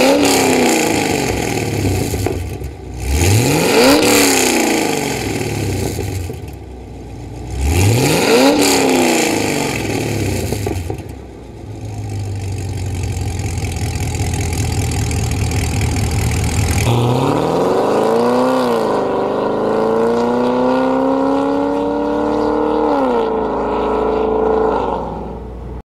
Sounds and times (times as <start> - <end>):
Vehicle: 0.0 - 25.8.